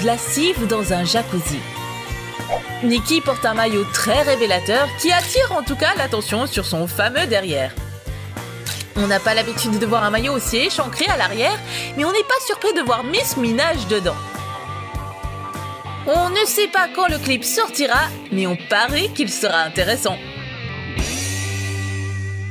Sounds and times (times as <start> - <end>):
Speech: 0.0 - 1.7, 2.8 - 7.8, 9.0 - 14.2, 16.1 - 20.2
Music: 0.0 - 22.5.